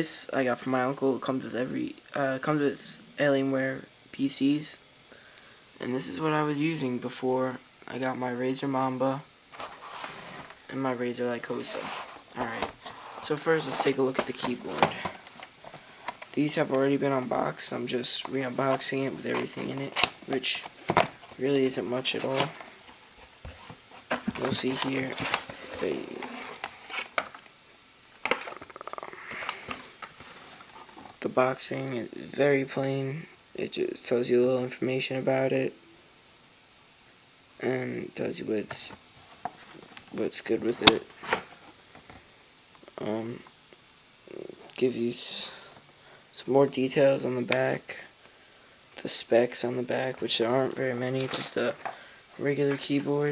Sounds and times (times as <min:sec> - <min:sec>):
Speech: 0:00.0 - 0:04.8, 0:05.8 - 0:09.3, 0:10.7 - 0:15.1, 0:16.4 - 0:20.7, 0:21.4 - 0:22.6, 0:24.3 - 0:26.5, 0:31.2 - 0:35.8, 0:37.6 - 0:39.0, 0:40.1 - 0:41.1, 0:43.0 - 0:43.5, 0:44.3 - 0:45.7, 0:46.3 - 0:48.1, 0:49.0 - 0:53.3.